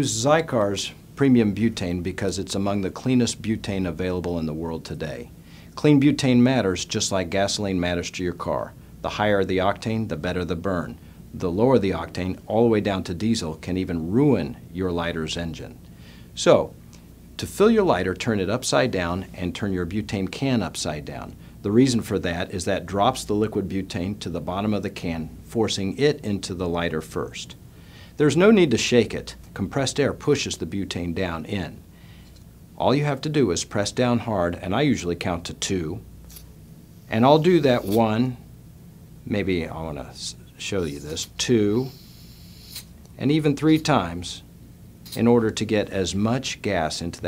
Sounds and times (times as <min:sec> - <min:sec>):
Speech: 0:00.0 - 0:15.8, 0:16.4 - 0:16.8, 0:17.4 - 0:27.6, 0:28.2 - 0:31.8, 0:32.8 - 0:36.1, 0:37.1 - 0:38.4, 0:39.3 - 0:42.0, 0:43.2 - 0:44.5, 0:45.2 - 0:47.2.